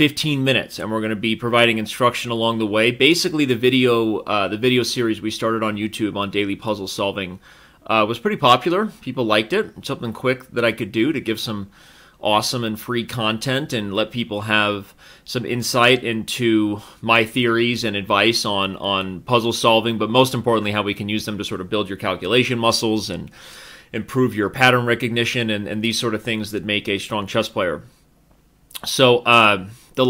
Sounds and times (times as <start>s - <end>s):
Speech: 0.0s - 23.3s, 23.9s - 27.9s, 28.8s - 30.1s.